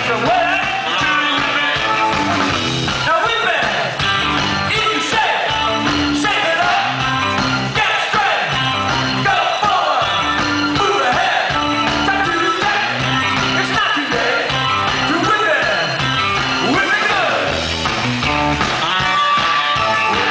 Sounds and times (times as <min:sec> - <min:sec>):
Music: 0:00.0 - 0:20.3.